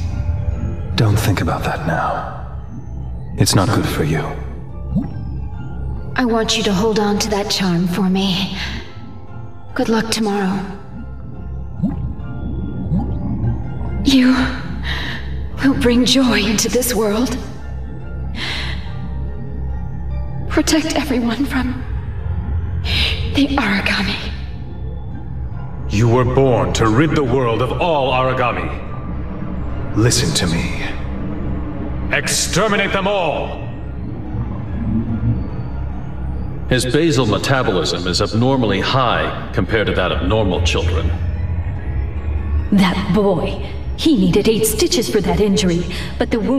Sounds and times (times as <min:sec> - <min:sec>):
Music: 0:00.0 - 0:46.5.